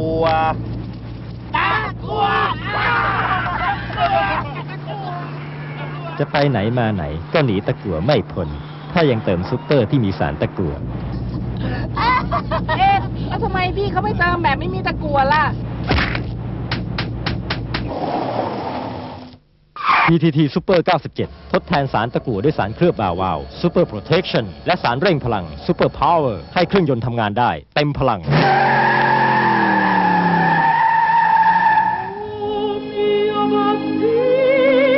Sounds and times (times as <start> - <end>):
Car: 0.0 - 20.1, 28.2 - 32.9
Speech: 20.1 - 28.3.